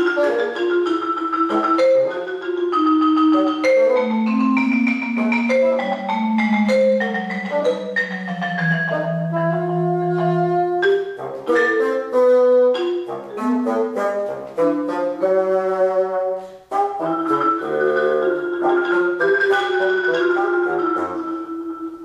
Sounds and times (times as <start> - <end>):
Marimba, xylophone: 0.0 - 15.6, 16.4 - 22.0.